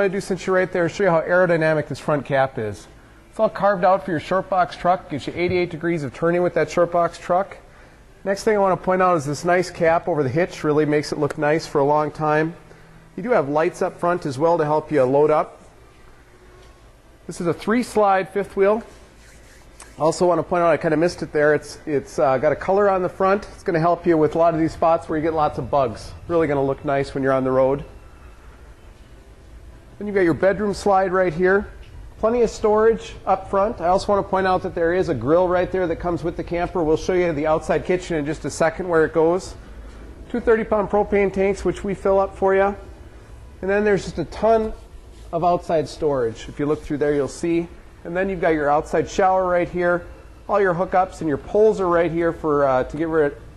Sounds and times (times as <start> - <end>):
Speech: 0.0 - 7.6, 8.2 - 12.6, 13.2 - 15.6, 17.3 - 18.9, 19.9 - 28.0, 30.0 - 39.6, 40.3 - 42.9, 43.6 - 53.4.